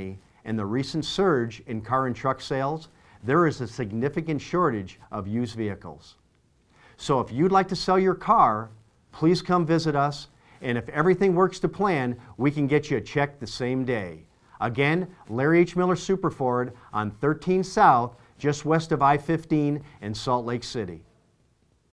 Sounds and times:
Speech: 0.0s - 6.2s, 7.0s - 21.1s.

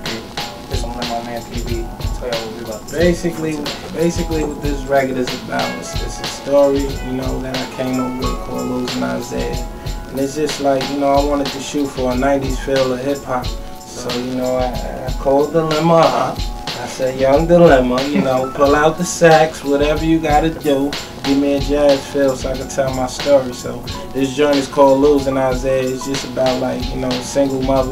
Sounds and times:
Music: 0.0s - 27.9s
Speech: 0.0s - 27.9s.

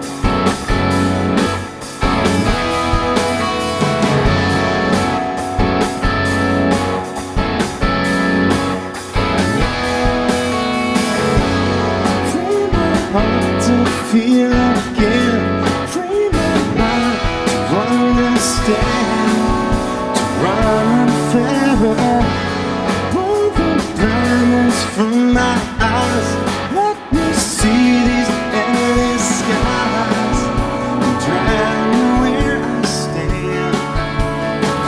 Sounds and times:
Drum: 0.0s - 34.8s
Drum kit: 0.0s - 34.8s
Rock music: 0.0s - 34.8s.

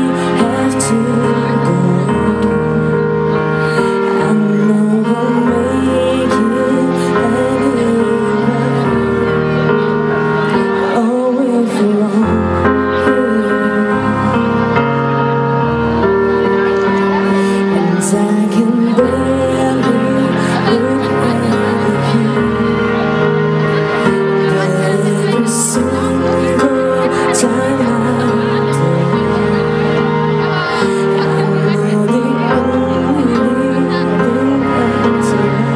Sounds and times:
Speech: 0.0s - 14.6s, 16.0s - 35.7s
Music: 0.0s - 35.7s.

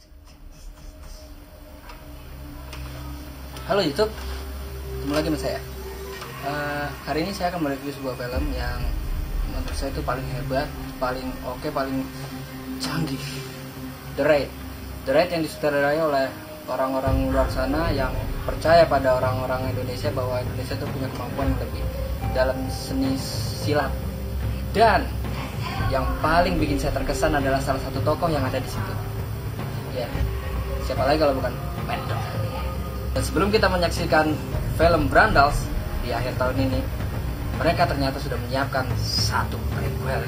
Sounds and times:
Music: 0.0s - 40.2s
Speech: 6.4s - 12.1s, 12.8s - 13.5s, 15.1s - 24.0s, 24.7s - 29.0s, 29.9s - 36.9s, 37.6s - 40.2s.

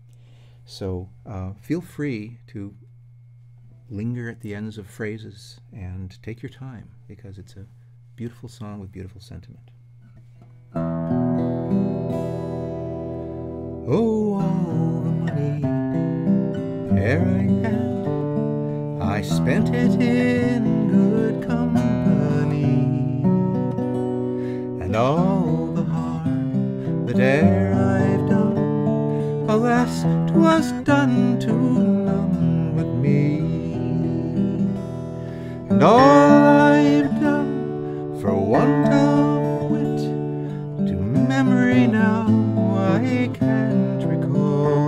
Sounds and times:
Acoustic guitar: 0.0s - 44.8s
Strum: 0.0s - 44.8s.

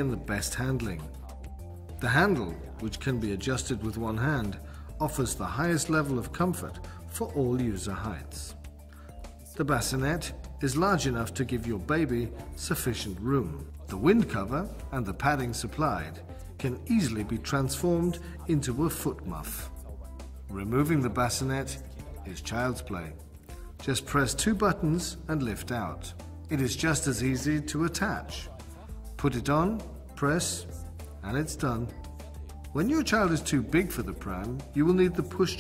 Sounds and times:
Speech: 0.0s - 8.6s, 9.5s - 32.0s, 32.7s - 35.6s
Music: 0.0s - 35.6s.

